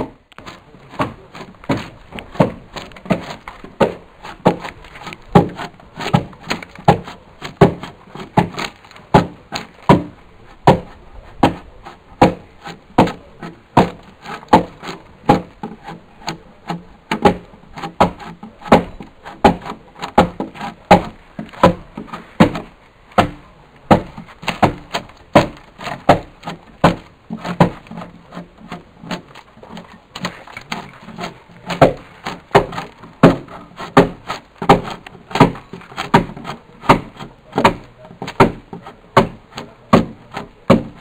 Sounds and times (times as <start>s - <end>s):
Wood: 0.0s - 41.0s.